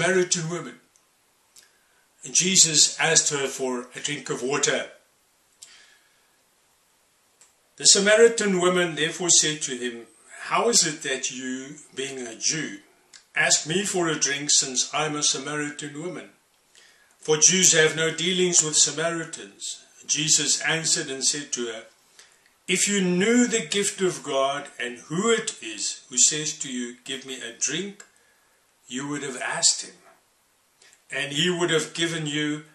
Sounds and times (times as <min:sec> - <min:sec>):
Speech: 0:00.0 - 0:00.9, 0:02.2 - 0:05.1, 0:07.8 - 0:16.4, 0:17.2 - 0:22.0, 0:22.7 - 0:28.2, 0:28.9 - 0:30.2, 0:31.1 - 0:32.7.